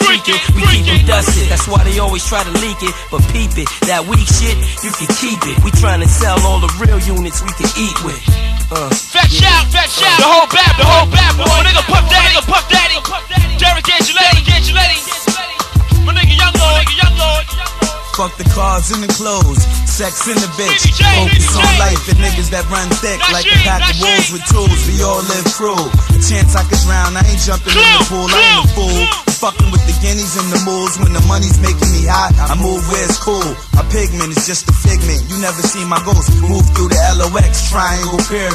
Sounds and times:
Hip hop music: 0.0 - 38.5
Rapping: 0.0 - 38.5.

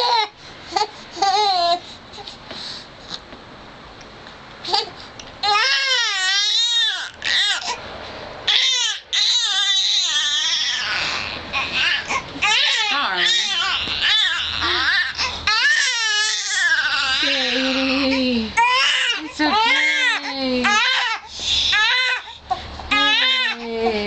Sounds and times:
Baby cry, infant cry: 4.8 - 7.8, 8.5 - 18.0, 18.6 - 23.7
Whimper: 8.5 - 24.0
Speech: 12.8 - 13.7, 17.1 - 20.8, 22.9 - 24.0.

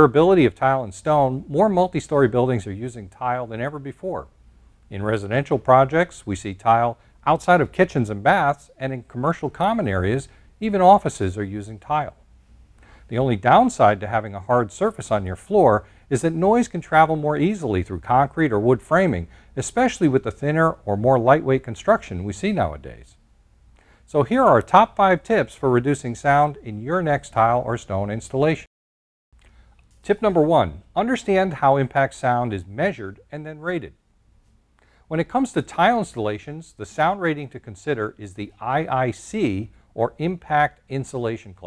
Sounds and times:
Speech: 0.0 - 4.3, 4.9 - 12.2, 13.1 - 23.2, 24.1 - 28.7, 30.0 - 34.0, 35.1 - 41.6.

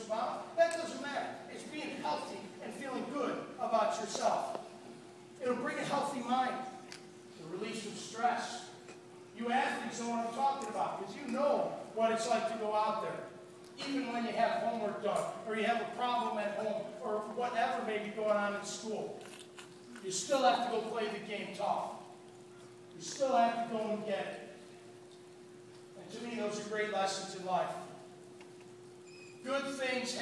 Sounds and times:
Male speech, man speaking: 0.0 - 4.6, 5.4 - 6.7, 7.4 - 8.8, 9.4 - 19.2, 20.0 - 22.0, 23.0 - 24.5, 26.0 - 27.9, 29.4 - 30.2.

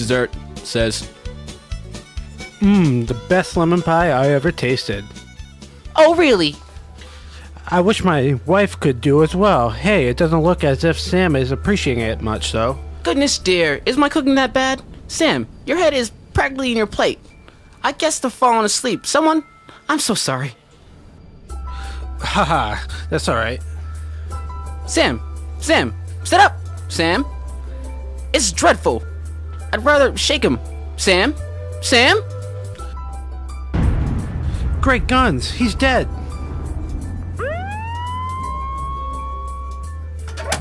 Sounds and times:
Speech: 0.0 - 1.1, 2.6 - 5.0, 6.0 - 6.6, 7.6 - 17.2, 17.8 - 20.6, 22.2 - 23.6, 24.9 - 27.3, 28.3 - 29.0, 29.7 - 32.3, 34.8 - 36.1
Music: 0.0 - 40.6.

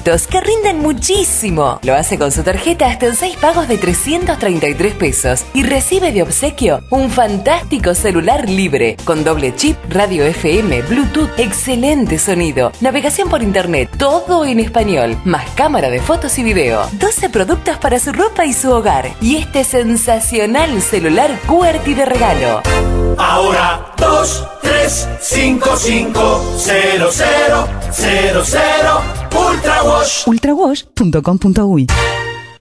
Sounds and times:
Music: 0.0 - 32.6
Speech: 0.1 - 22.6, 30.1 - 32.0.

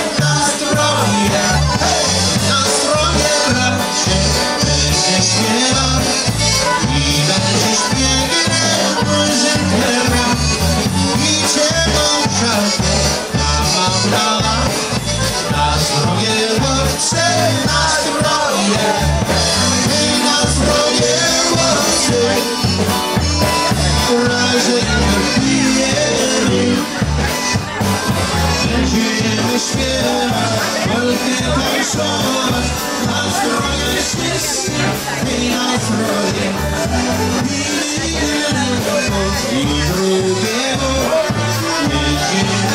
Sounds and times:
Funk: 0.0 - 42.7.

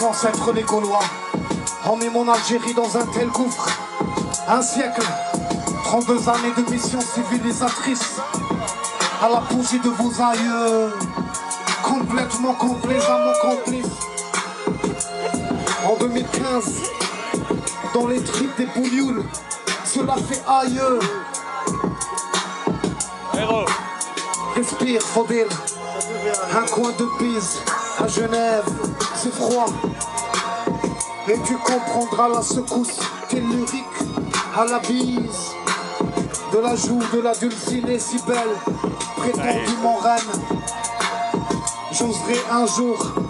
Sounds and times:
Music: 0.0 - 43.2
Speech: 23.4 - 23.7, 39.2 - 40.2.

